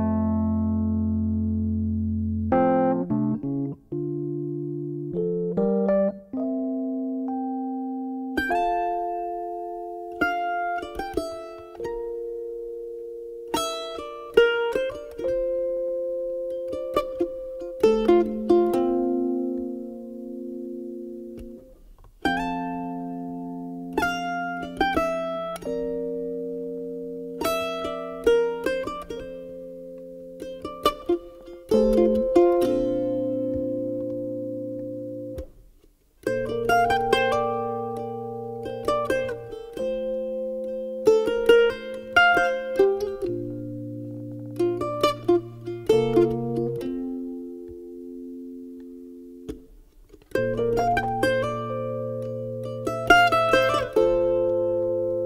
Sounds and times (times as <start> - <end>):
Pizzicato: 0.0 - 55.2.